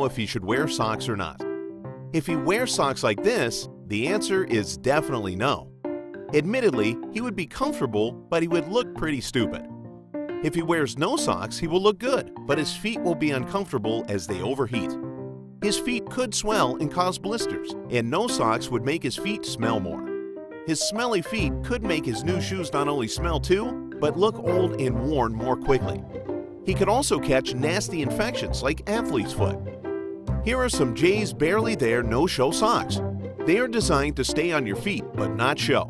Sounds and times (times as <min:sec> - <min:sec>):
Speech: 0:00.0 - 0:01.4, 0:02.2 - 0:05.7, 0:06.3 - 0:09.7, 0:10.4 - 0:15.0, 0:15.6 - 0:20.0, 0:20.7 - 0:26.0, 0:26.7 - 0:29.6, 0:30.4 - 0:35.8
Music: 0:00.0 - 0:35.8.